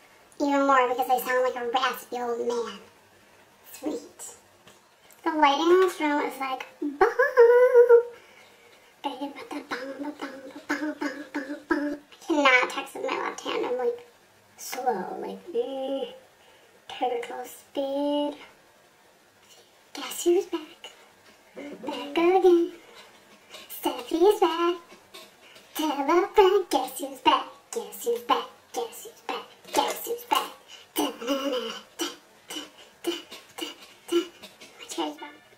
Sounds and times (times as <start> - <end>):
Inside, small room: 0.0 - 35.5
Speech: 0.4 - 2.9, 3.6 - 4.4, 5.2 - 8.2, 9.0 - 16.2, 16.9 - 18.6, 19.5 - 21.0, 21.6 - 22.8, 23.6 - 24.9, 25.7 - 35.5.